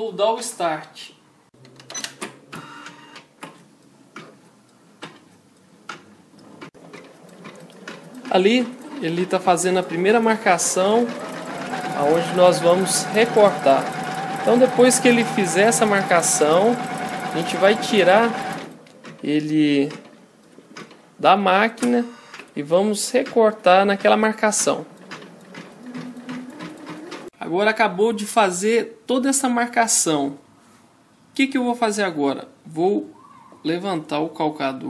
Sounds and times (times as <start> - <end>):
Speech: 0.0 - 1.2, 8.3 - 11.2, 11.8 - 18.4, 19.2 - 20.0, 21.2 - 24.9, 27.4 - 30.4, 31.4 - 34.8
Sewing machine: 6.8 - 18.8, 23.9 - 27.3.